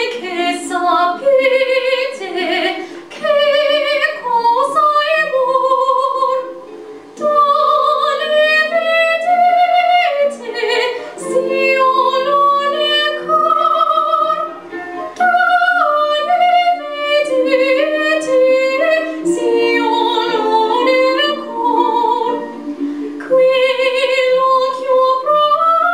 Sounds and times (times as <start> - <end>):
Female singing: 0.0 - 6.5, 7.2 - 14.6, 15.2 - 22.6, 23.2 - 25.9
Music: 0.0 - 25.9.